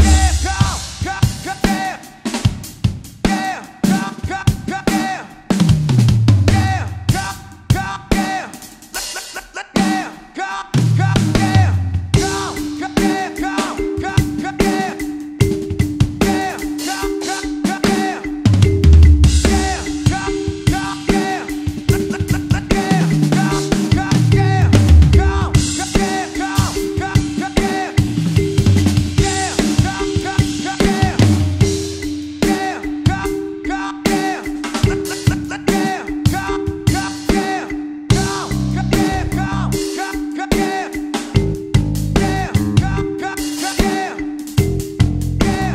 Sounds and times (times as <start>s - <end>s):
Bass drum: 0.0s - 1.5s, 5.7s - 7.3s, 10.8s - 12.7s, 18.6s - 20.8s, 23.4s - 26.0s, 28.0s - 30.2s, 30.8s - 32.2s, 38.1s - 39.8s, 41.4s - 43.1s, 44.6s - 45.7s
Drum kit: 0.0s - 45.7s.